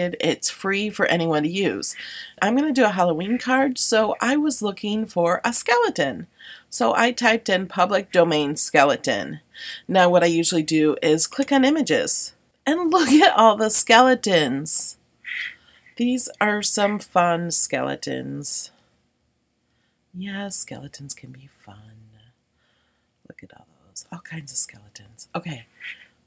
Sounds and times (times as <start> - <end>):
Speech: 0.0 - 15.0, 16.0 - 18.7, 20.2 - 22.3, 23.3 - 25.7.